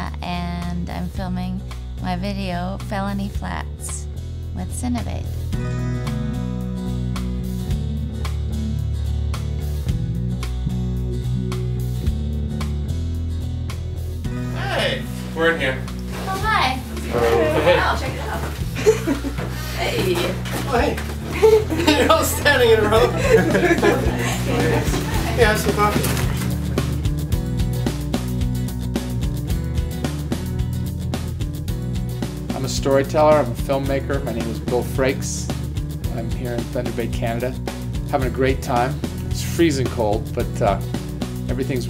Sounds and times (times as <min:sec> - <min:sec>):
Soundtrack music: 0:00.0 - 0:41.9.